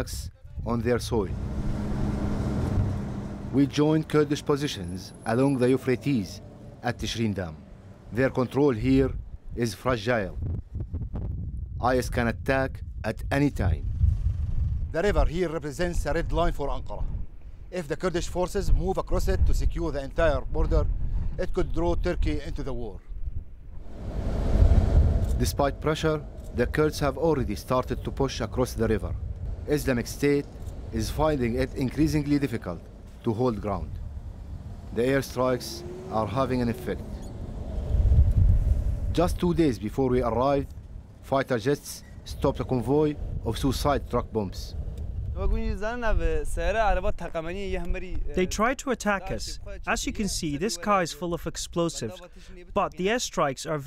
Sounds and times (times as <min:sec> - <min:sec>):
Speech: 0:00.0 - 0:01.4, 0:03.5 - 0:10.4, 0:11.8 - 0:13.8, 0:15.0 - 0:17.1, 0:17.8 - 0:23.0, 0:25.4 - 0:33.9, 0:34.9 - 0:37.1, 0:39.2 - 0:40.7, 0:41.3 - 0:44.8, 0:45.4 - 0:53.8
Outside, rural or natural: 0:00.0 - 0:53.8.